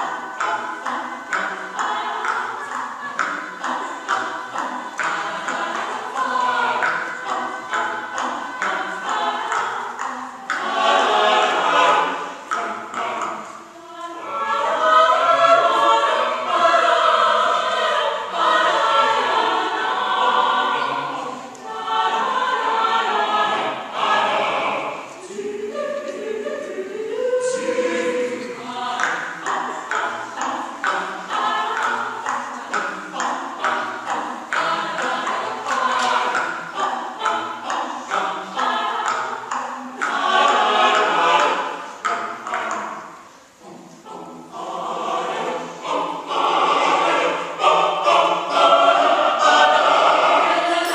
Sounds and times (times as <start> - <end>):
Music: 0.0 - 50.9.